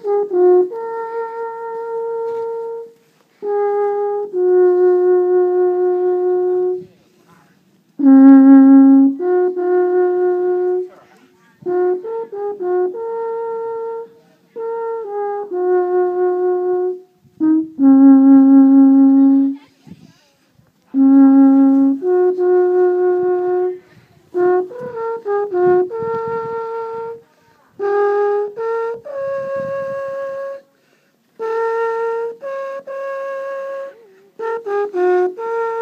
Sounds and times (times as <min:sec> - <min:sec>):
Wind instrument, woodwind instrument: 0:00.0 - 0:35.8.